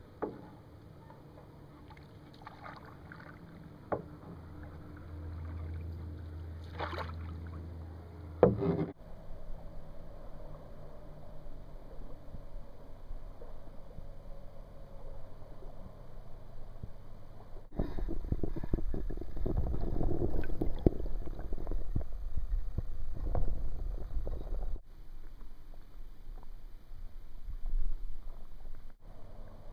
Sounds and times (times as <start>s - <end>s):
Boat, Water vehicle: 0.0s - 29.7s.